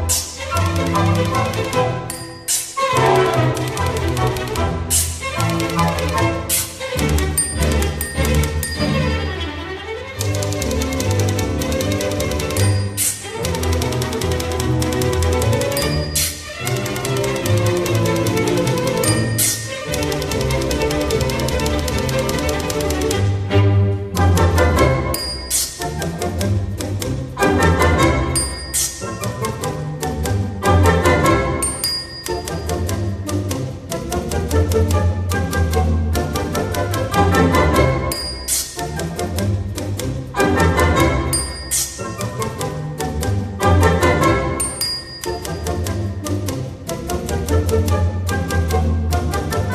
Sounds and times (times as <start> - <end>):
Orchestra: 0.0 - 49.7.